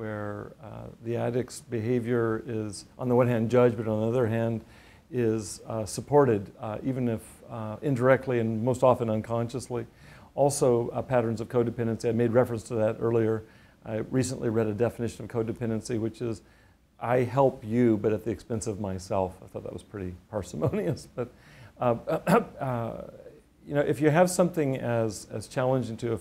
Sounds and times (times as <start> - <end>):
Speech: 0.0 - 16.4, 17.0 - 26.2.